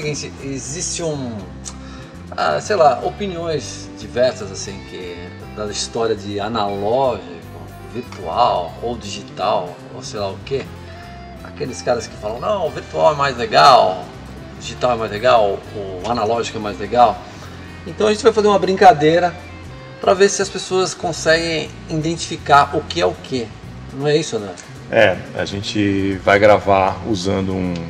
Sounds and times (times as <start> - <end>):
Speech: 0.0 - 1.5, 2.4 - 10.7, 11.5 - 14.0, 14.6 - 17.2, 17.9 - 19.4, 20.0 - 27.8.